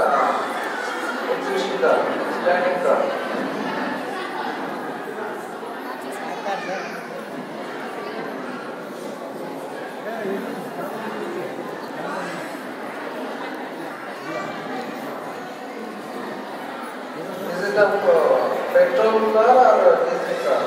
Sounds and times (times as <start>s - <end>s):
Speech: 0.0s - 7.1s, 13.1s - 20.6s.